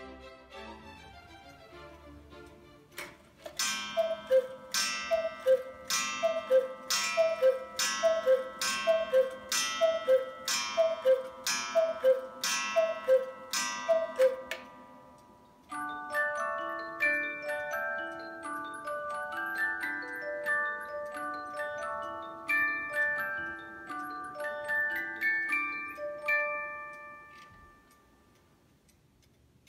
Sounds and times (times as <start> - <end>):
Music: 0.0 - 3.6, 15.7 - 28.1.